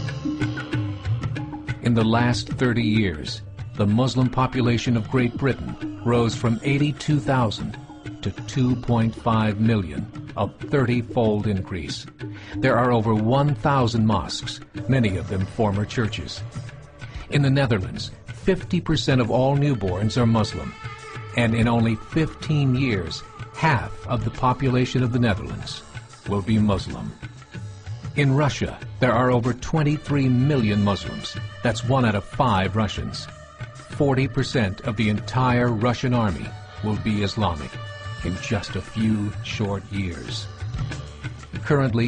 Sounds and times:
Music: 0.0s - 42.0s
Speech: 1.8s - 16.5s, 17.2s - 20.8s, 21.4s - 27.2s, 28.2s - 33.3s, 34.0s - 40.5s, 41.6s - 42.0s.

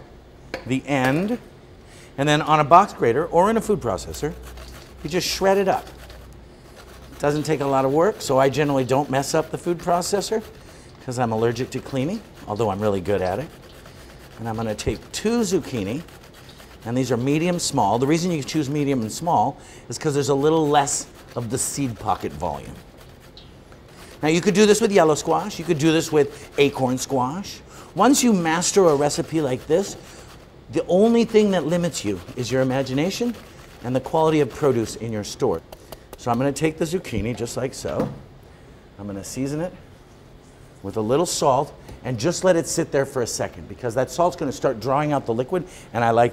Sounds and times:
Speech: 0.7s - 1.5s, 2.2s - 4.4s, 5.0s - 5.9s, 7.2s - 13.5s, 14.4s - 16.1s, 16.9s - 22.8s, 24.2s - 30.0s, 30.7s - 35.6s, 36.2s - 38.2s, 39.0s - 39.8s, 40.8s - 46.3s.

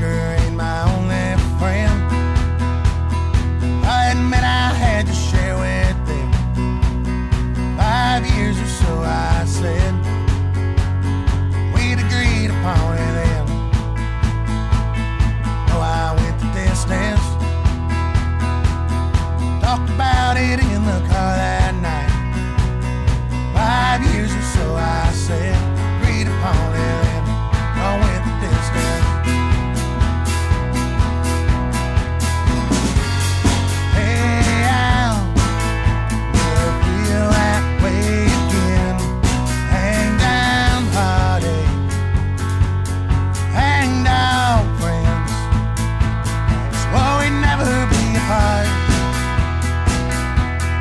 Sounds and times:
Music: 0.0s - 50.8s.

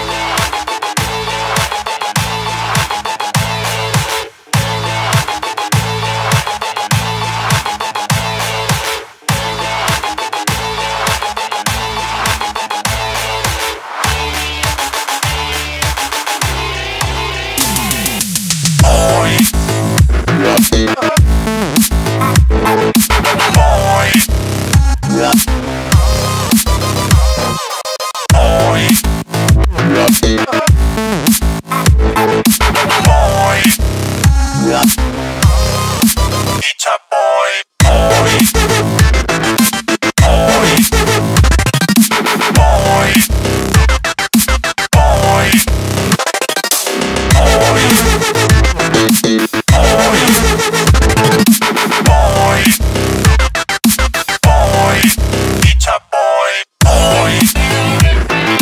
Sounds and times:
Music: 0.0s - 36.6s, 37.8s - 56.0s, 56.8s - 58.6s.

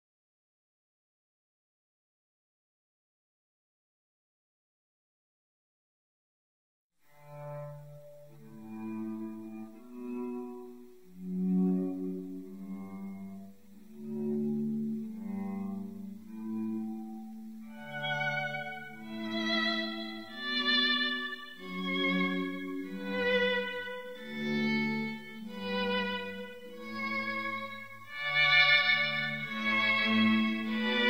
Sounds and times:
Music: 7.0s - 31.1s.

